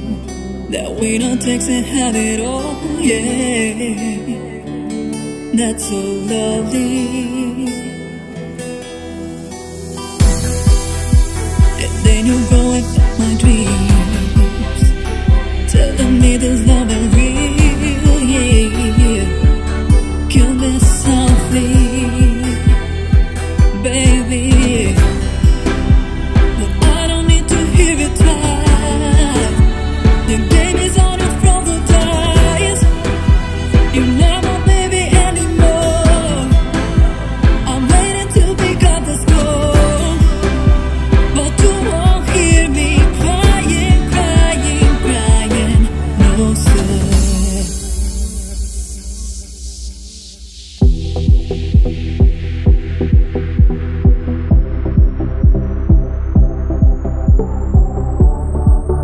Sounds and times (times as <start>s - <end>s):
Music: 0.0s - 59.0s.